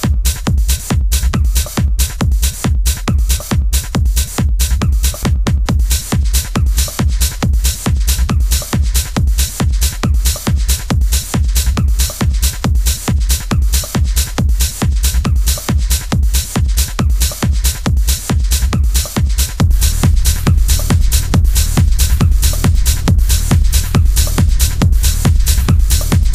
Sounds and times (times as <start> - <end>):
Techno: 0.0 - 26.3.